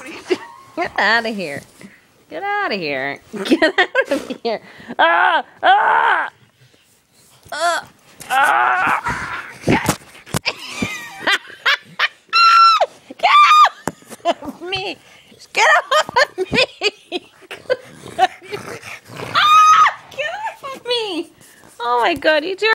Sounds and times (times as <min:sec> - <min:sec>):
Speech: 0:20.1 - 0:22.7.